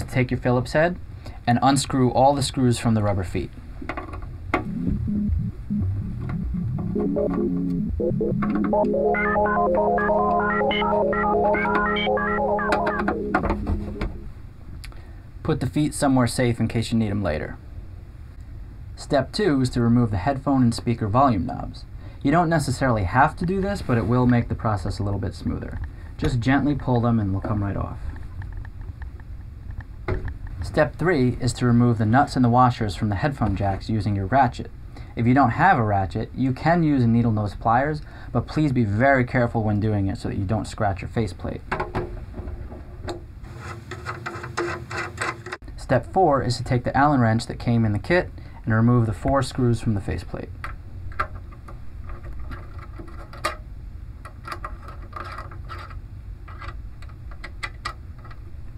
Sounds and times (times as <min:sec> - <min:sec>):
Speech: 0:00.0 - 0:03.6, 0:15.4 - 0:17.6, 0:19.0 - 0:28.1, 0:30.6 - 0:41.7, 0:45.8 - 0:50.6
Music: 0:04.6 - 0:14.3.